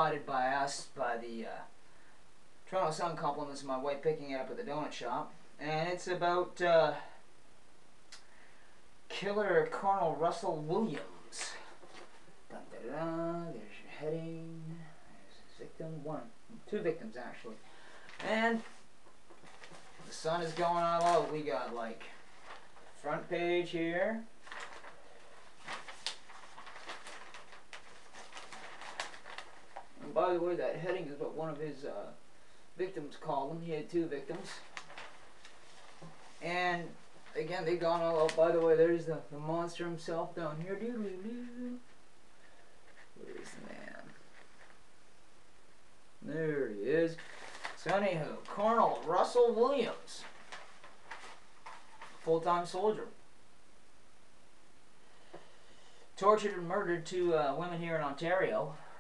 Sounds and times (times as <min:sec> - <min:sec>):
Speech: 0:00.0 - 0:01.8, 0:02.7 - 0:07.2, 0:09.1 - 0:11.7, 0:12.5 - 0:17.6, 0:18.2 - 0:18.8, 0:20.0 - 0:22.2, 0:23.0 - 0:24.3, 0:30.0 - 0:32.2, 0:32.8 - 0:34.7, 0:36.4 - 0:41.8, 0:43.2 - 0:44.2, 0:46.2 - 0:47.2, 0:47.8 - 0:50.4, 0:52.2 - 0:53.2, 0:56.2 - 0:58.9.